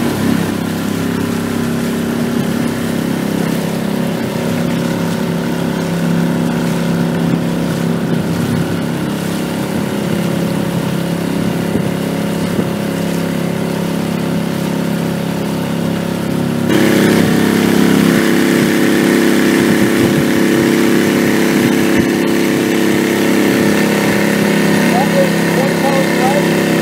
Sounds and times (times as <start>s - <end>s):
Boat, Water vehicle: 0.0s - 26.8s.